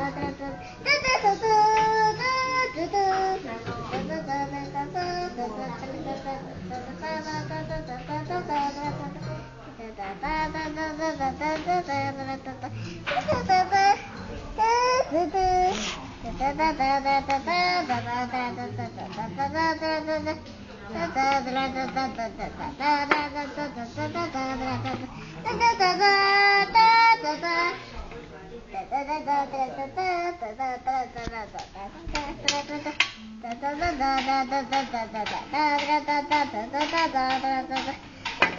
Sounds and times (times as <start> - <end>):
Child singing: 0.0 - 27.9, 28.8 - 38.5
Speech: 0.0 - 38.5.